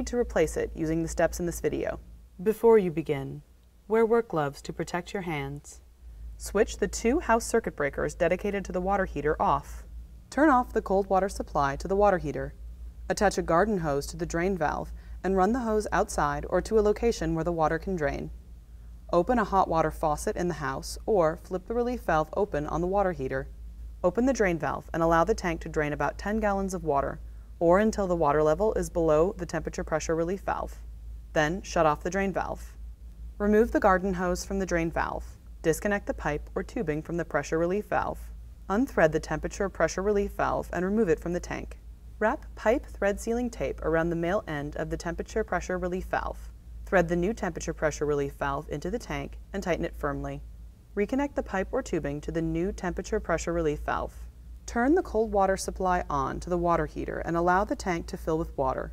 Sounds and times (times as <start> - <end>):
Speech: 0.0 - 5.8, 6.4 - 18.3, 19.1 - 30.8, 31.4 - 32.7, 33.4 - 50.4, 51.0 - 58.9.